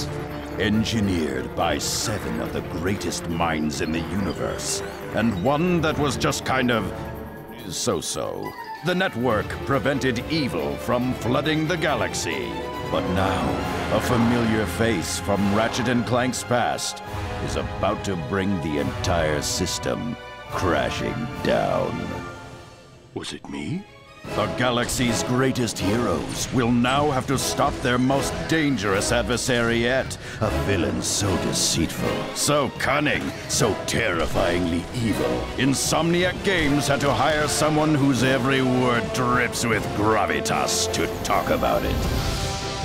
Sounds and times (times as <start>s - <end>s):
Speech: 0.0s - 22.2s, 23.2s - 42.0s
Music: 0.0s - 42.8s.